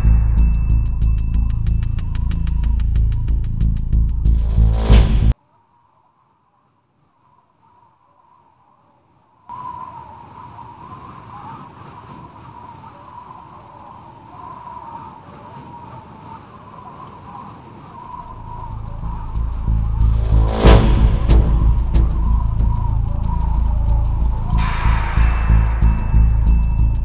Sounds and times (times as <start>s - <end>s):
Music: 0.0s - 5.4s, 18.7s - 27.0s
Outside, urban or manmade: 0.0s - 27.0s.